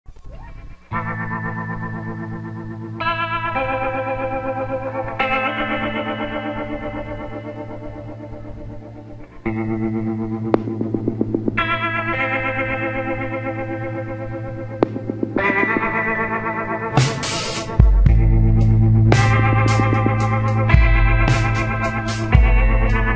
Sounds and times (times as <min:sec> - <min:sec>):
Effects unit: 0:00.1 - 0:23.1
Music: 0:00.1 - 0:23.1
Echo: 0:03.7 - 0:23.1.